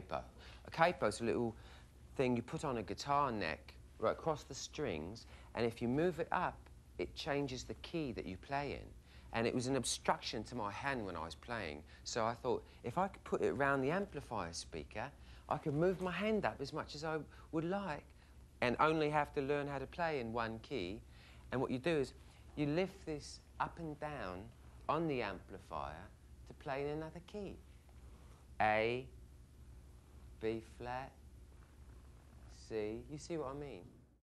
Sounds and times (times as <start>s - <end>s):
Speech: 0.0s - 1.6s, 2.2s - 27.7s, 28.6s - 29.2s, 30.4s - 31.2s, 32.4s - 34.2s.